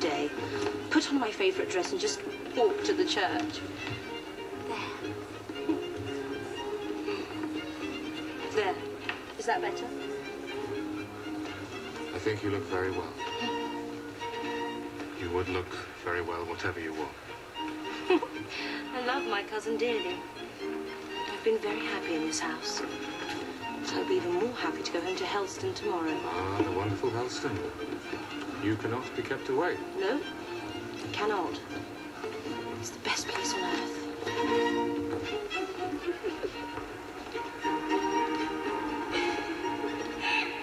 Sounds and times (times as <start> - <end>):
Music: 0.0 - 40.6.